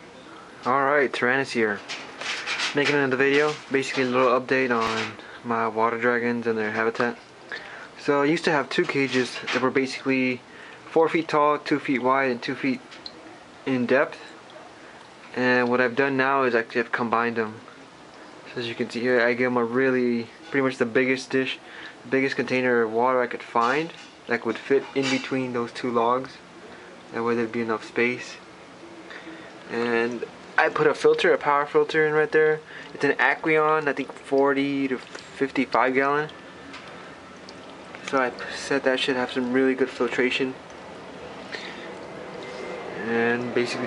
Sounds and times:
Speech: 0.6 - 1.9, 2.7 - 12.8, 13.6 - 14.4, 15.3 - 17.7, 18.5 - 26.4, 27.1 - 28.4, 29.7 - 36.4, 38.0 - 40.6, 43.0 - 43.8
Stream: 27.0 - 43.8.

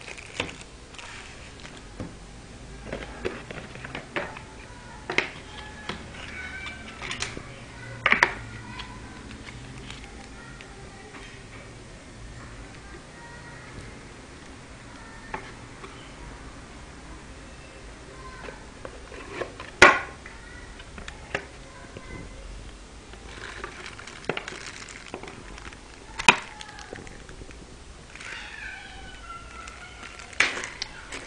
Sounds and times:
Speech: 4.2 - 14.1, 20.2 - 22.6.

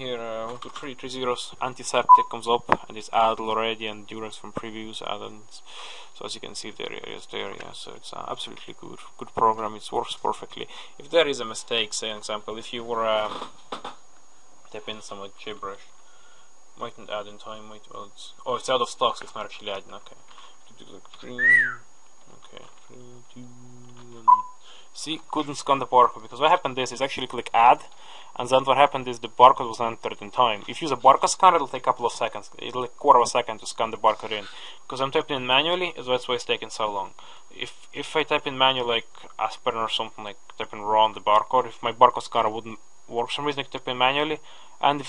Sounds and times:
Speech: 0.0 - 13.5, 14.7 - 15.9, 16.8 - 21.7, 22.3 - 24.3, 25.0 - 45.0
Whistling: 21.4 - 21.8.

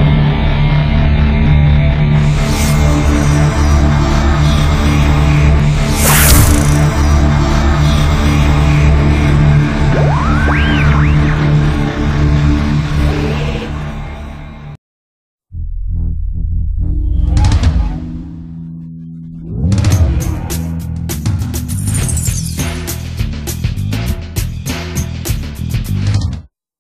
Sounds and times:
Music: 0.0 - 14.8, 15.6 - 26.5.

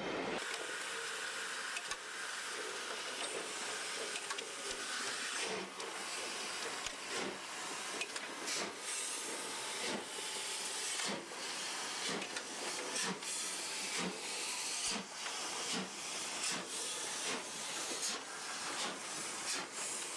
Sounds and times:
Railroad car, train wagon: 0.0 - 20.1
Train: 0.0 - 20.1.

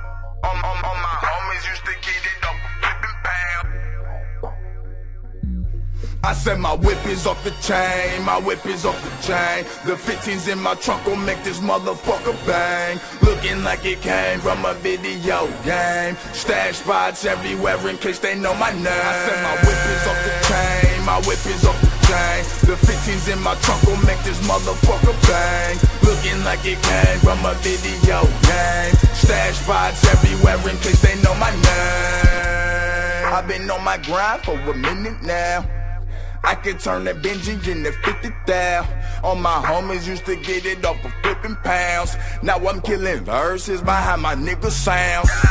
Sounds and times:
Music: 0.0 - 45.5.

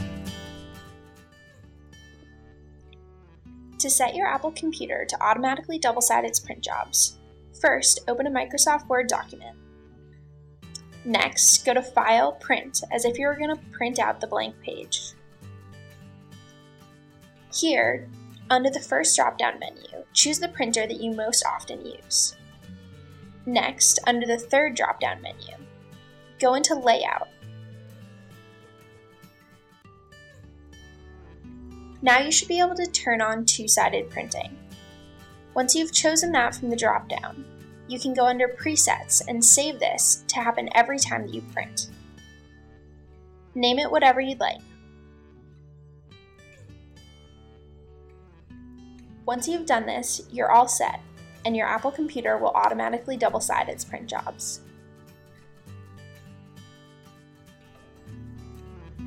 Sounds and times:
Music: 0.0 - 59.0
Speech: 3.8 - 9.5, 11.0 - 15.1, 17.6 - 22.3, 23.5 - 25.6, 26.4 - 27.3, 32.0 - 34.6, 35.6 - 41.9, 43.6 - 44.6, 49.3 - 54.6.

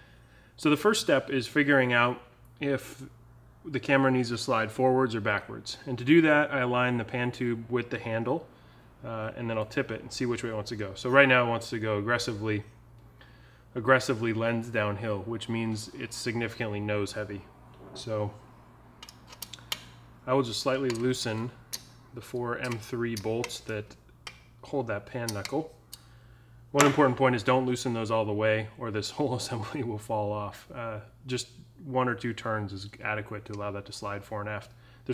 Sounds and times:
Speech: 0.6 - 12.7, 13.8 - 18.4, 20.2 - 21.6, 22.2 - 24.0, 24.6 - 25.8, 26.7 - 35.1.

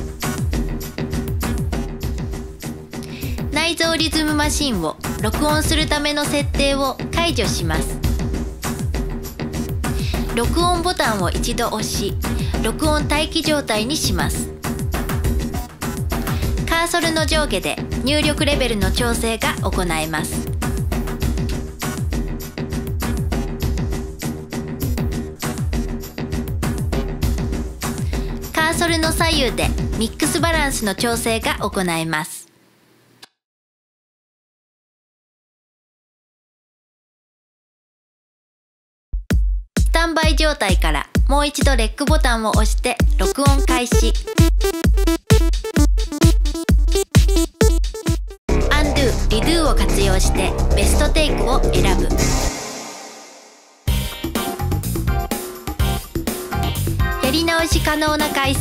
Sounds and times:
Music: 0.0 - 31.9, 39.2 - 58.6
Speech: 3.5 - 8.0, 10.3 - 14.5, 16.6 - 20.4, 28.6 - 32.5, 39.9 - 44.2, 48.6 - 52.2, 57.2 - 58.6.

